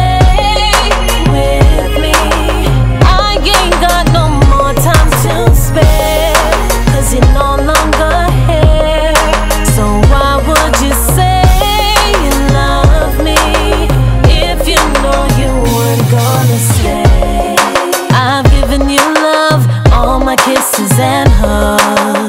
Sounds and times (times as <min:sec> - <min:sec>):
Music: 0:00.0 - 0:22.2.